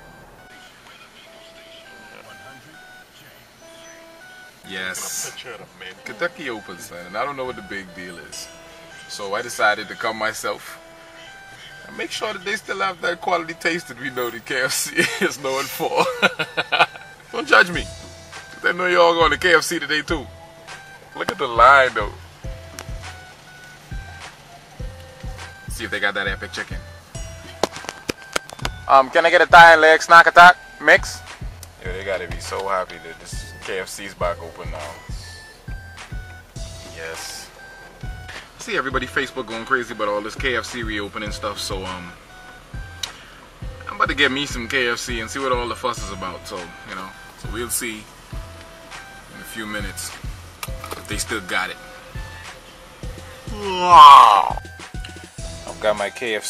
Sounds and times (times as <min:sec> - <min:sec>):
Music: 0:00.0 - 0:56.4
Speech: 0:00.5 - 0:03.4, 0:04.6 - 0:08.5, 0:09.1 - 0:10.8, 0:11.9 - 0:16.1, 0:18.6 - 0:20.3, 0:21.2 - 0:22.2, 0:25.7 - 0:26.8, 0:28.9 - 0:31.2, 0:31.8 - 0:35.2, 0:37.0 - 0:37.5, 0:38.6 - 0:42.2, 0:43.9 - 0:48.0, 0:49.4 - 0:50.2, 0:51.0 - 0:51.8, 0:55.7 - 0:56.4.